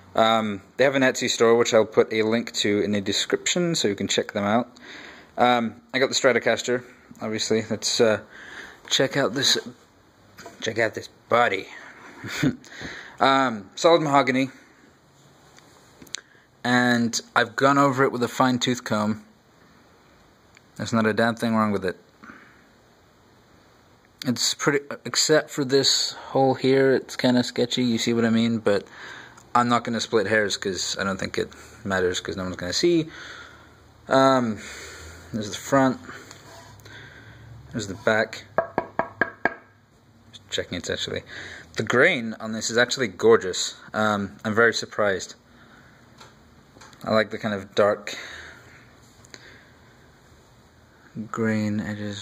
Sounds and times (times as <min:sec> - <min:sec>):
Speech: 0:00.2 - 0:04.8, 0:05.4 - 0:08.3, 0:08.9 - 0:09.8, 0:10.5 - 0:12.6, 0:13.2 - 0:14.6, 0:16.6 - 0:19.3, 0:20.8 - 0:22.1, 0:24.2 - 0:28.9, 0:29.5 - 0:33.1, 0:34.1 - 0:34.7, 0:35.3 - 0:36.2, 0:37.7 - 0:38.5, 0:40.3 - 0:45.4, 0:47.0 - 0:48.3, 0:51.2 - 0:52.2.